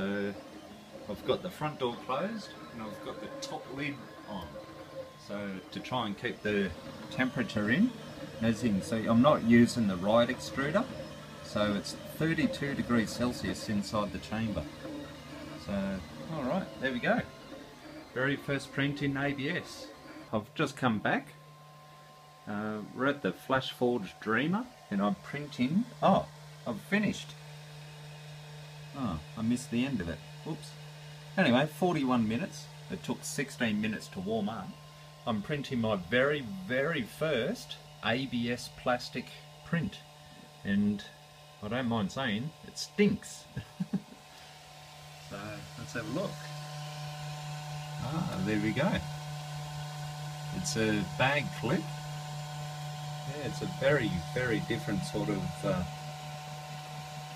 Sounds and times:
Speech: 0.0s - 0.4s, 1.0s - 4.6s, 5.2s - 14.8s, 15.6s - 17.3s, 18.2s - 21.4s, 22.5s - 27.4s, 28.9s - 30.8s, 31.4s - 43.6s, 45.3s - 46.6s, 48.0s - 49.1s, 50.5s - 52.0s, 53.3s - 55.9s
Printer: 0.0s - 57.3s.

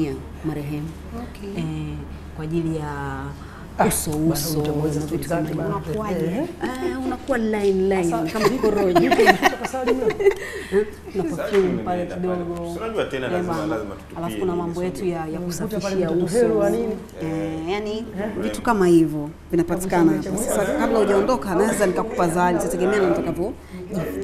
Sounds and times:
Female speech, woman speaking: 0.0s - 10.2s, 10.8s - 12.5s, 13.3s - 24.2s.

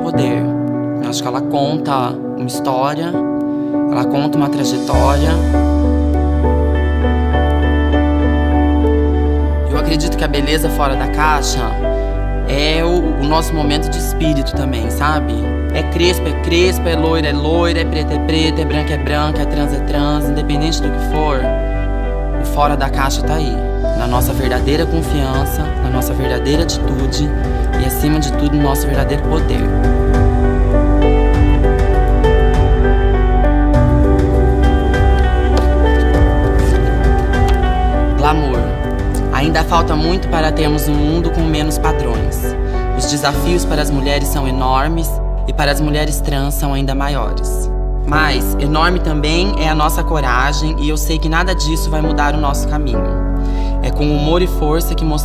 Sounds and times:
Speech: 0.0s - 3.2s, 3.9s - 5.5s, 9.7s - 11.8s, 12.5s - 21.5s, 22.4s - 29.7s, 38.2s - 53.2s, 53.8s - 55.2s
Music: 0.0s - 55.2s.

